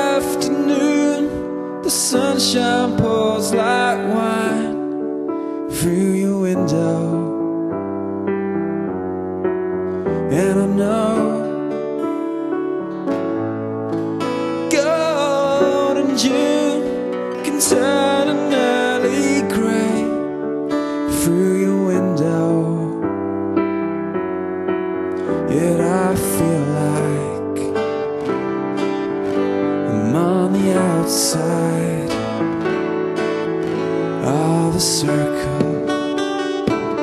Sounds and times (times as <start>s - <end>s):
Musical instrument: 0.0s - 37.0s.